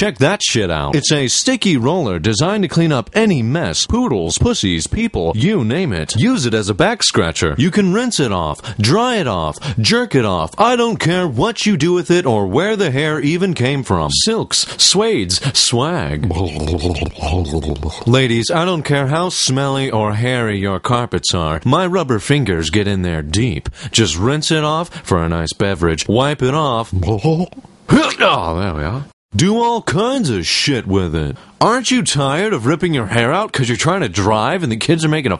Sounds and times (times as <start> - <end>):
Speech: 0.0 - 35.3.